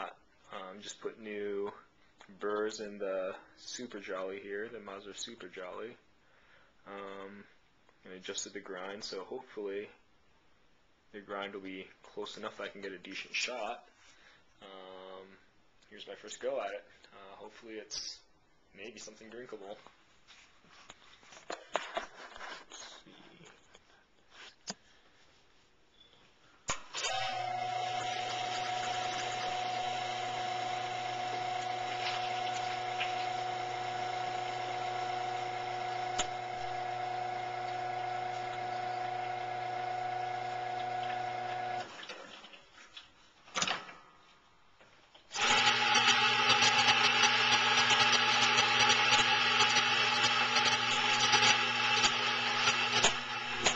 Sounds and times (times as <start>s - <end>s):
Speech: 0.0s - 6.0s, 6.9s - 10.0s, 11.1s - 13.9s, 14.6s - 19.9s.